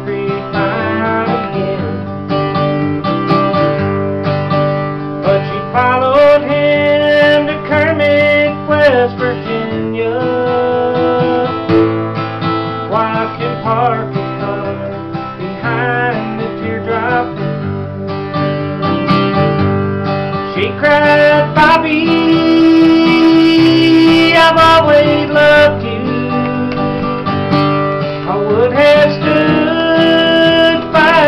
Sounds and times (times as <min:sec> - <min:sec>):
Male singing: 0:00.0 - 0:02.1, 0:05.2 - 0:11.7, 0:12.9 - 0:15.0, 0:15.6 - 0:17.5, 0:20.5 - 0:27.1, 0:28.2 - 0:31.2
Music: 0:00.0 - 0:31.2.